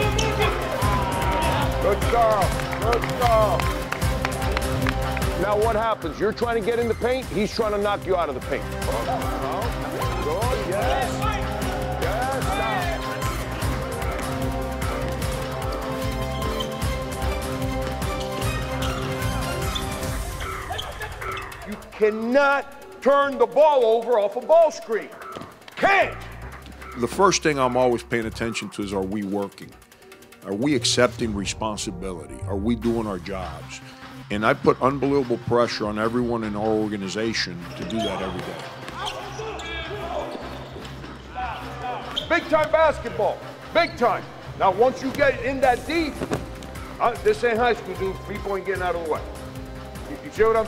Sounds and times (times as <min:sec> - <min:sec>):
Male speech, man speaking: 0:00.0 - 0:00.8, 0:01.8 - 0:03.6, 0:05.4 - 0:13.0, 0:21.7 - 0:25.2, 0:27.0 - 0:29.8, 0:30.4 - 0:40.4, 0:41.4 - 0:46.2, 0:47.0 - 0:49.3, 0:50.1 - 0:50.6
Music: 0:00.0 - 0:50.6.